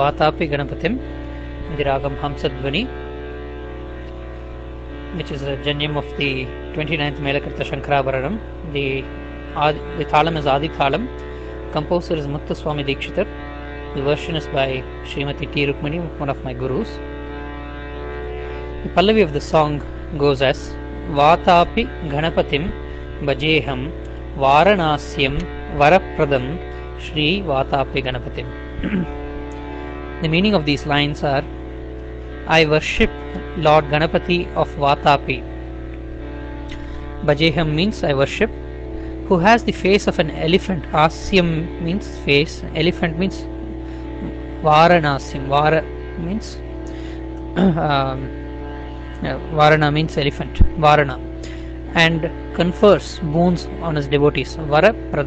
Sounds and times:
Speech: 0:00.0 - 0:01.0, 0:01.7 - 0:03.0, 0:05.2 - 0:11.1, 0:11.7 - 0:13.3, 0:13.9 - 0:17.0, 0:18.9 - 0:29.1, 0:30.2 - 0:31.5, 0:32.5 - 0:35.4, 0:37.2 - 0:38.5, 0:39.3 - 0:43.5, 0:44.2 - 0:46.6, 0:47.6 - 0:48.4, 0:49.2 - 0:51.2, 0:51.9 - 0:55.2.

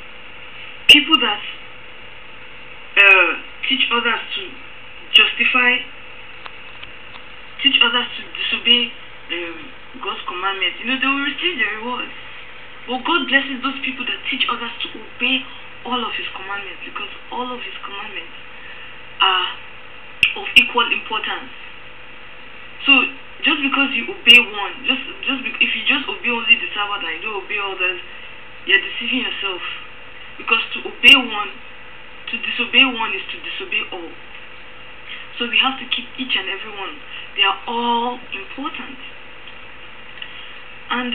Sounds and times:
Speech: 0:00.9 - 0:01.6, 0:03.0 - 0:05.9, 0:07.6 - 0:12.2, 0:12.9 - 0:18.4, 0:19.2 - 0:19.6, 0:20.2 - 0:21.6, 0:22.8 - 0:31.6, 0:32.3 - 0:34.2, 0:35.2 - 0:39.1, 0:40.9 - 0:41.1.

